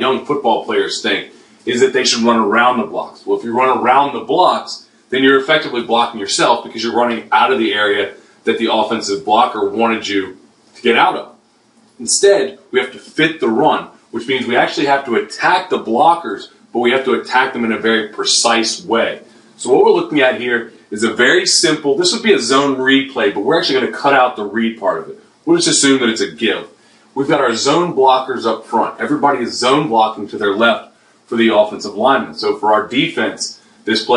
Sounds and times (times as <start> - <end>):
Speech: 0.0 - 11.4, 12.0 - 34.1.